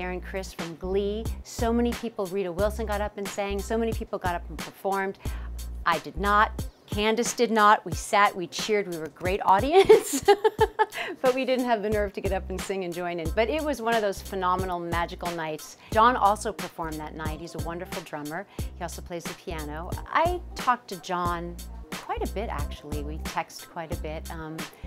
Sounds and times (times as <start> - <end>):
Speech: 0.0 - 5.2, 5.9 - 9.9, 11.2 - 24.7
Music: 0.0 - 24.8.